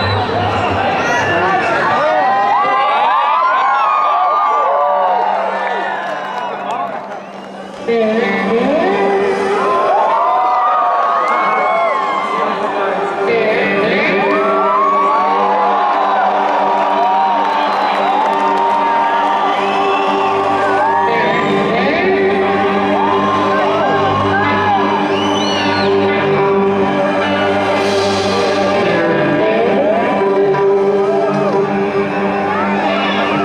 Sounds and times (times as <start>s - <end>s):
Music: 0.0s - 33.4s.